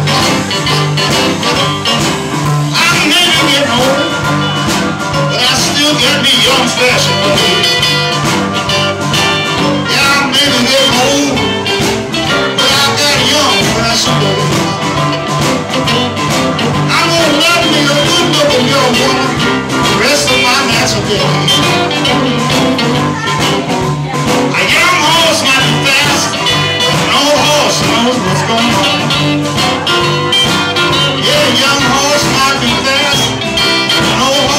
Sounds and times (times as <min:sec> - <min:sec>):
Blues: 0:00.0 - 0:34.5.